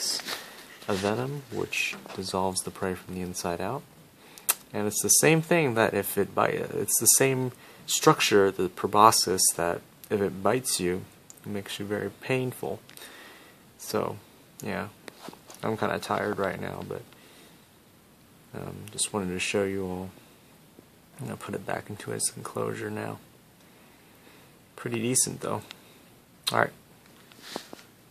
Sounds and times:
Speech: 0.0 - 0.3, 0.9 - 3.9, 4.7 - 12.8, 13.8 - 15.0, 15.6 - 17.1, 18.5 - 20.2, 21.2 - 23.2, 24.8 - 25.7, 26.5 - 26.8.

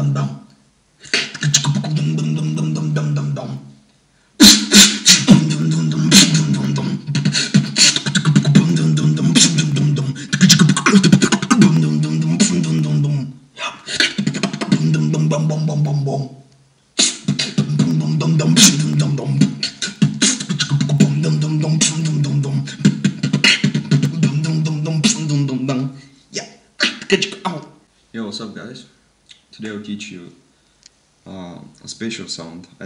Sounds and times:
Beatboxing: 0.0 - 3.8, 4.4 - 27.8
Speech: 25.3 - 30.4, 31.2 - 32.8.

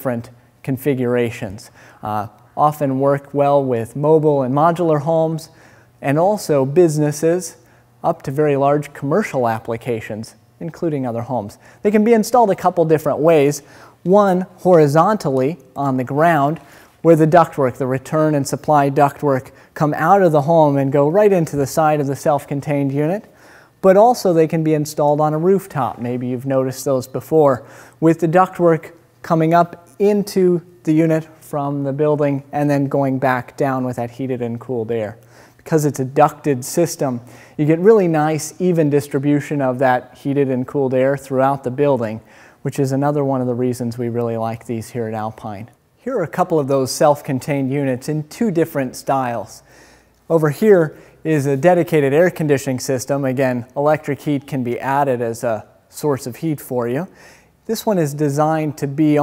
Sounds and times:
Speech: 0.0 - 49.7, 50.3 - 59.2.

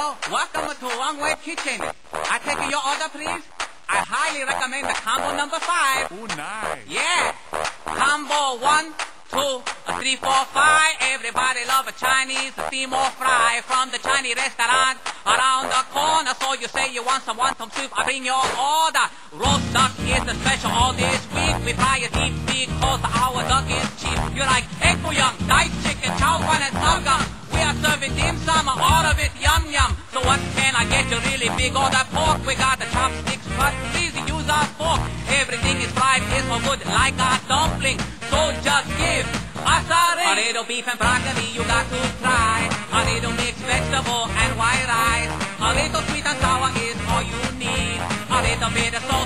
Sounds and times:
Music: 0.0 - 49.2.

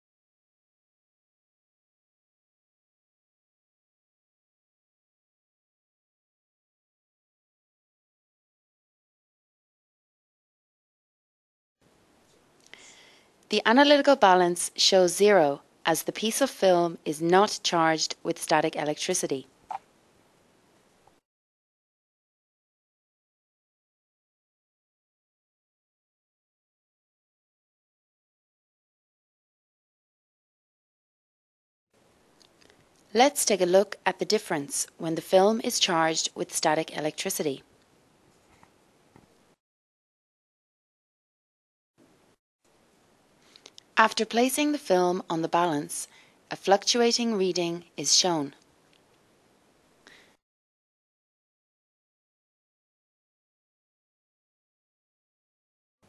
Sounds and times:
Speech: 13.5 - 19.5, 33.2 - 37.7, 44.0 - 48.6.

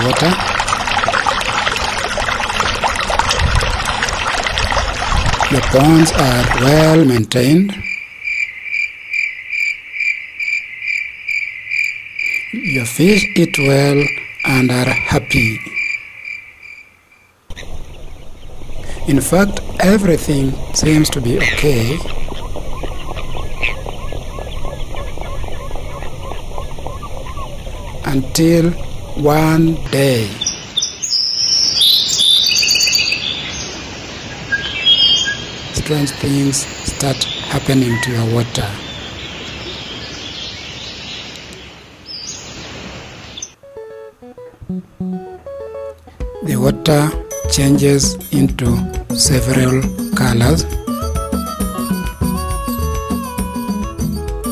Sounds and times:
Speech: 0.0 - 0.4, 5.5 - 7.8, 12.6 - 15.8, 19.1 - 22.1, 28.0 - 30.4, 35.8 - 38.8, 46.4 - 50.7.

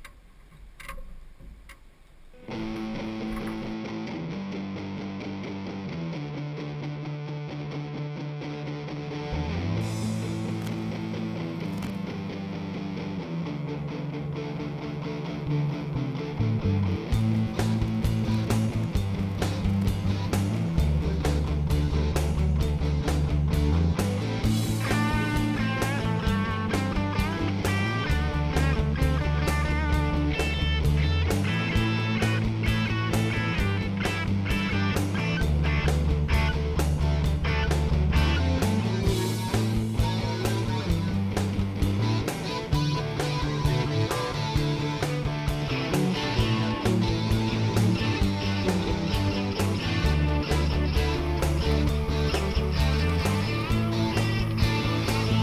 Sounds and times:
Music: 2.3 - 55.4.

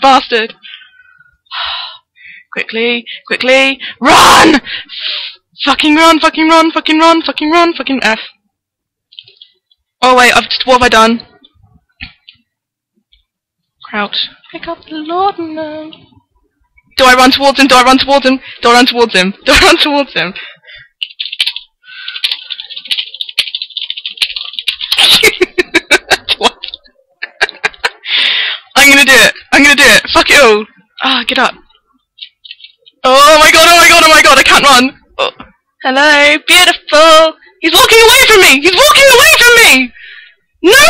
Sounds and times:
Speech: 5.6 - 8.4, 10.0 - 11.5, 13.8 - 16.2, 16.9 - 20.4, 28.8 - 31.7, 33.0 - 40.0.

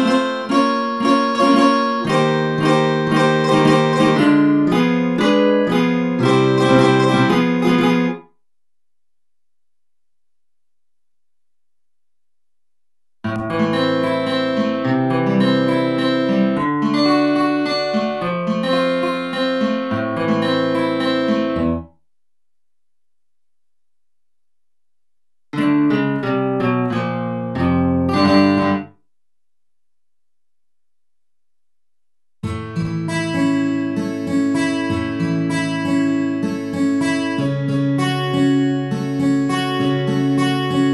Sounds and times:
Acoustic guitar: 0.0 - 8.3, 13.3 - 21.9, 25.6 - 29.0, 32.4 - 40.9.

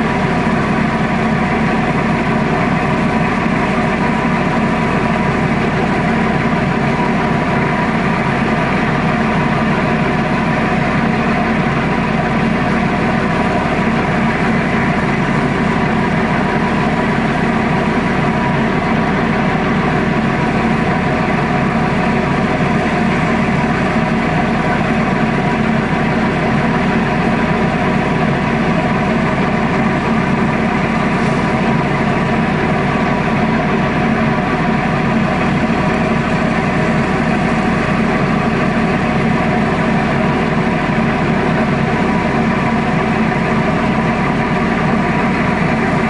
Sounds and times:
Ship: 0.0 - 46.0.

